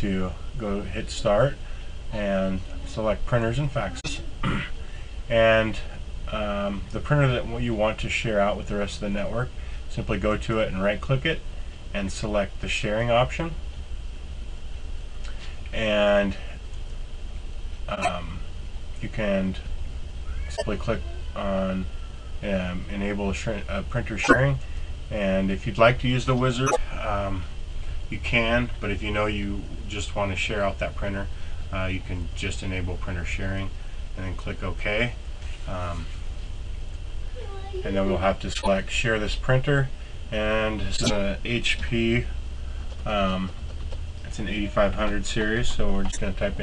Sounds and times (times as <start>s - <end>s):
Speech: 0.0s - 13.6s, 15.7s - 16.6s, 17.9s - 19.7s, 20.5s - 27.5s, 28.1s - 36.2s, 37.4s - 42.3s, 43.0s - 43.6s, 44.3s - 46.6s.